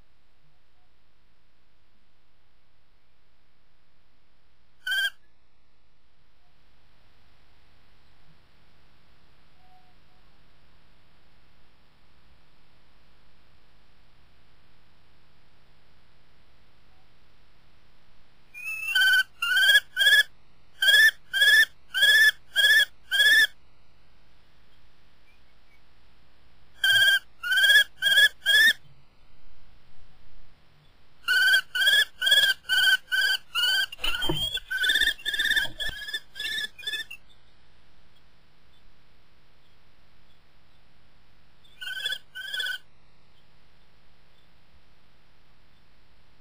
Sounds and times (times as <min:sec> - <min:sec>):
Bird: 0:04.8 - 0:05.3, 0:18.5 - 0:23.6, 0:26.8 - 0:29.0, 0:30.8 - 0:38.9, 0:41.6 - 0:43.5.